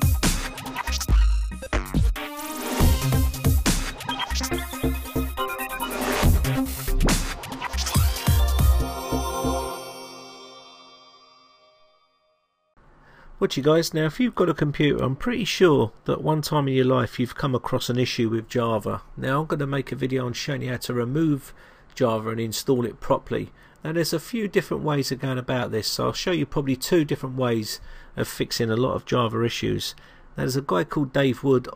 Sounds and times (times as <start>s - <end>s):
Music: 0.0s - 12.8s.